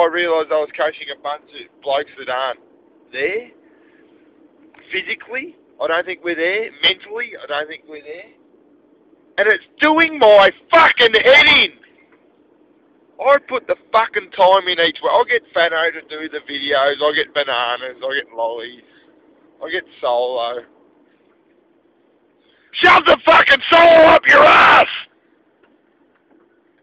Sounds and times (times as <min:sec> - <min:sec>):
Speech: 0:00.0 - 0:03.6, 0:04.8 - 0:08.4, 0:09.4 - 0:11.8, 0:13.2 - 0:18.9, 0:19.6 - 0:20.7, 0:22.8 - 0:25.1.